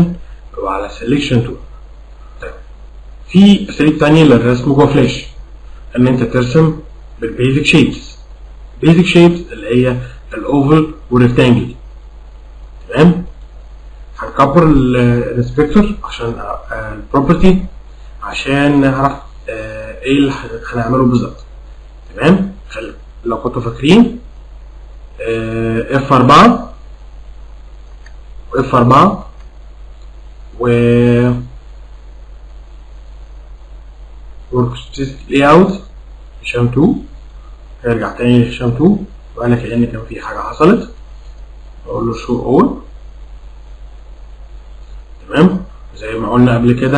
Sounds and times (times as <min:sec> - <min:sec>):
Speech: 0:00.0 - 0:01.7, 0:02.4 - 0:02.6, 0:03.3 - 0:11.8, 0:12.8 - 0:13.3, 0:14.1 - 0:21.5, 0:22.1 - 0:24.2, 0:25.2 - 0:26.8, 0:28.5 - 0:29.4, 0:30.6 - 0:31.6, 0:34.5 - 0:37.2, 0:37.8 - 0:41.0, 0:41.8 - 0:42.9, 0:45.2 - 0:46.9.